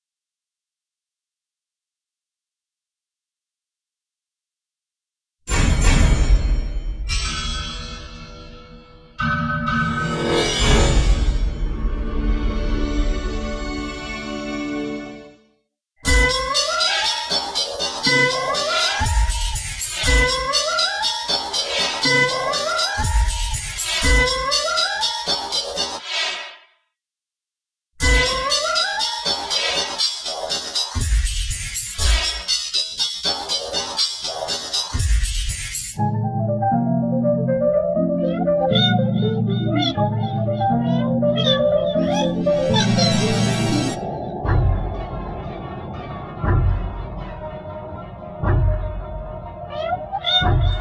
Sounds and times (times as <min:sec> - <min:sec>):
Theremin: 0:36.0 - 0:50.8.